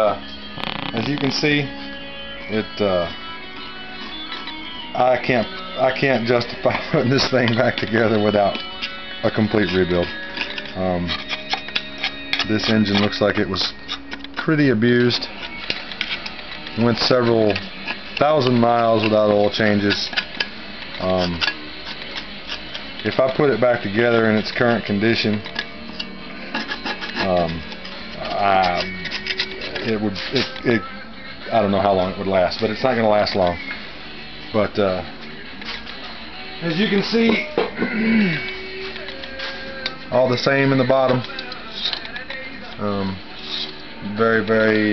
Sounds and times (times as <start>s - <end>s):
Music: 0.0s - 44.9s
Speech: 1.0s - 1.7s, 2.5s - 3.1s, 5.0s - 8.6s, 9.2s - 10.1s, 10.8s - 11.1s, 12.4s - 13.7s, 14.4s - 15.3s, 16.8s - 17.6s, 18.2s - 20.1s, 21.0s - 21.4s, 23.0s - 25.4s, 27.2s - 27.6s, 28.2s - 28.9s, 29.8s - 30.9s, 31.5s - 33.6s, 34.6s - 35.1s, 36.6s - 37.5s, 40.1s - 41.3s, 42.8s - 43.2s, 44.0s - 44.9s.